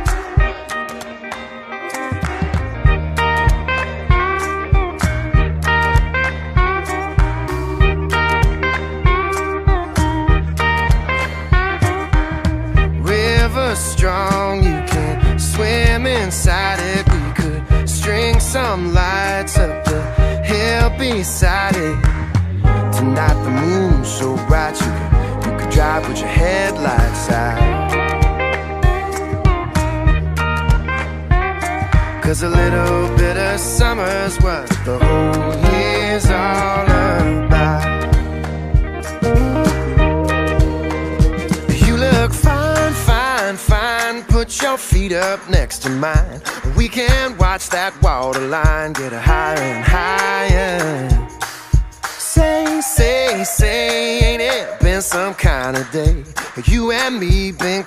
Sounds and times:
Music: 0.0s - 57.8s.

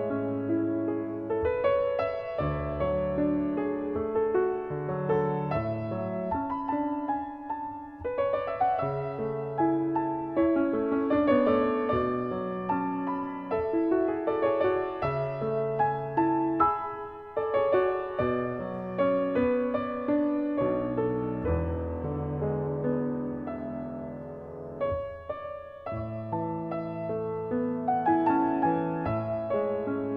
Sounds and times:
Keyboard (musical): 0.0s - 30.1s.

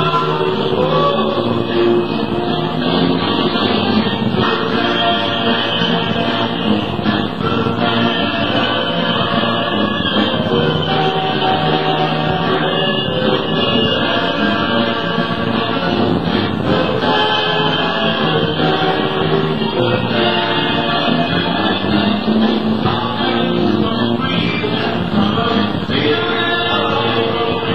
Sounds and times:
Soul music: 0.0s - 27.7s.

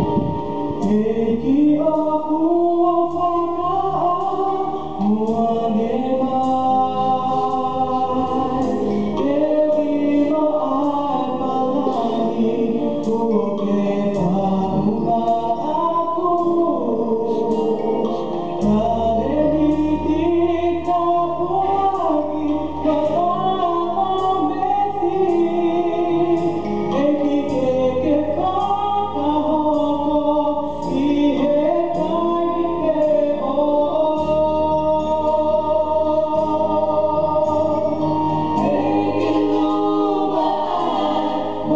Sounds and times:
Music: 0.0s - 41.7s.

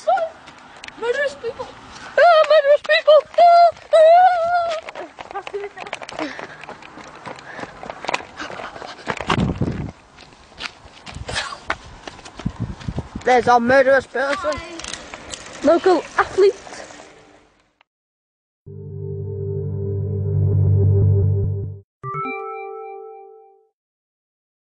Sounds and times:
Vehicle: 0.0s - 17.8s.

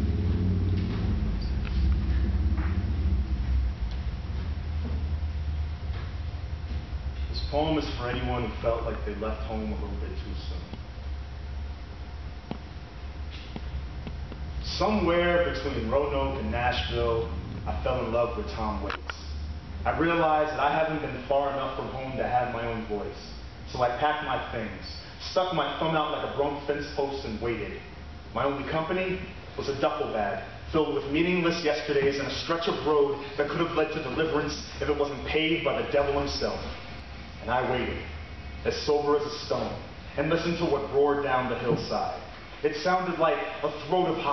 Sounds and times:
Speech: 7.3s - 10.8s, 14.6s - 36.8s, 37.4s - 44.3s.

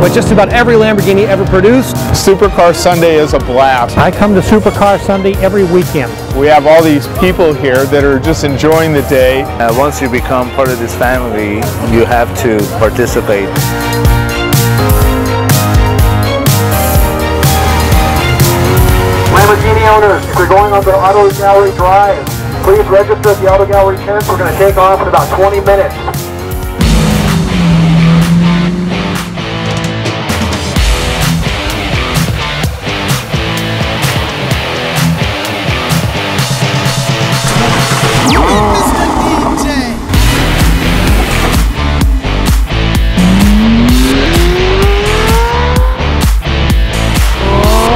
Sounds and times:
Speech: 0.0s - 13.5s, 19.3s - 26.0s, 37.6s - 40.0s
Music: 0.0s - 47.9s.

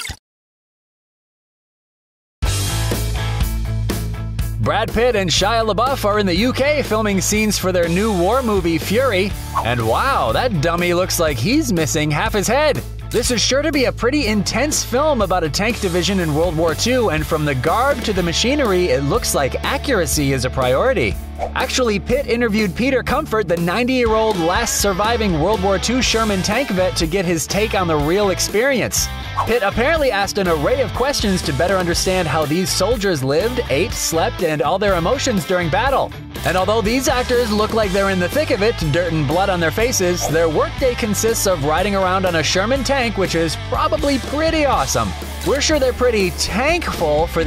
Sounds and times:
Music: 2.4s - 47.4s
Speech: 4.6s - 47.4s.

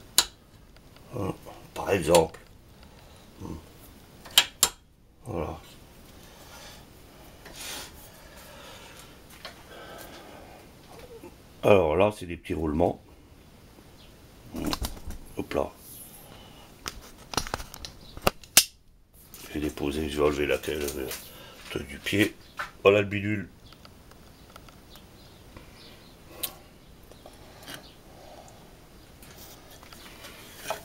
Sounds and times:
Speech: 1.1s - 2.4s, 5.2s - 5.8s, 11.6s - 13.0s, 15.4s - 15.8s, 19.4s - 23.5s.

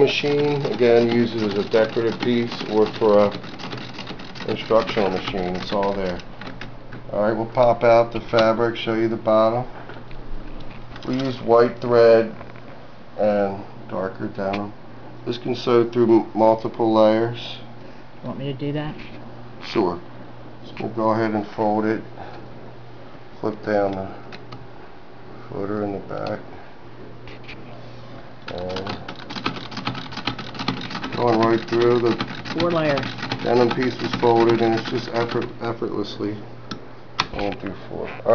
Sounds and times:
Speech: 0.0s - 3.4s, 4.5s - 6.2s, 31.2s - 36.4s, 37.3s - 38.3s
Sewing machine: 0.0s - 6.6s, 28.6s - 35.5s.

